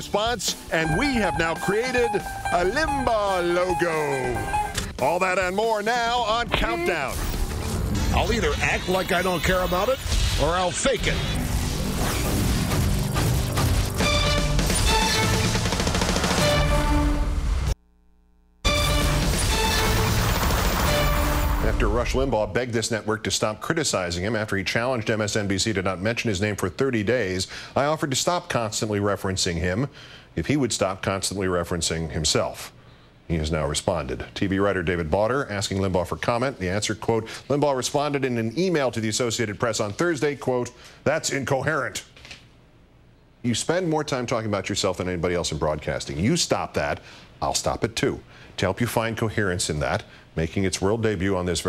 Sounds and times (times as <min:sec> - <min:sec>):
Speech: 0:00.0 - 0:04.4, 0:05.0 - 0:07.2, 0:08.1 - 0:11.3, 0:21.6 - 0:42.1, 0:43.4 - 0:51.6
Music: 0:00.7 - 0:04.9, 0:11.3 - 0:17.8, 0:18.7 - 0:21.8.